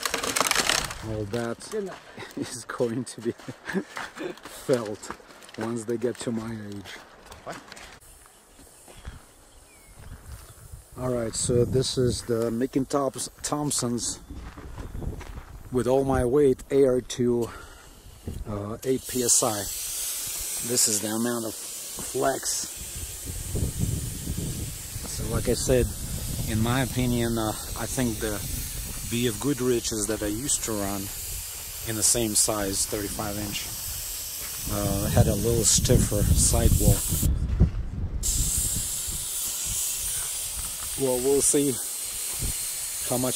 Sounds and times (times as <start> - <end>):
Speech: 1.0 - 3.4, 4.6 - 7.6, 11.0 - 14.2, 15.7 - 17.5, 18.4 - 19.7, 20.6 - 22.7, 25.1 - 25.9, 26.5 - 28.4, 29.1 - 31.1, 31.9 - 33.7, 34.7 - 37.0, 41.0 - 41.8, 43.1 - 43.3.